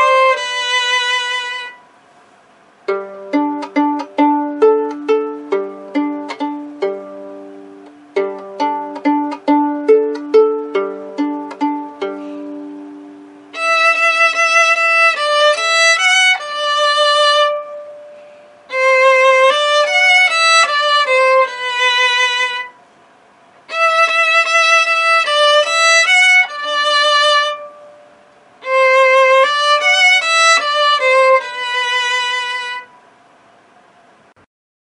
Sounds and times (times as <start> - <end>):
Violin, fiddle: 0.0 - 1.8, 2.9 - 7.5, 8.2 - 12.6, 13.5 - 18.1, 18.7 - 22.8, 23.7 - 27.9, 28.6 - 33.0.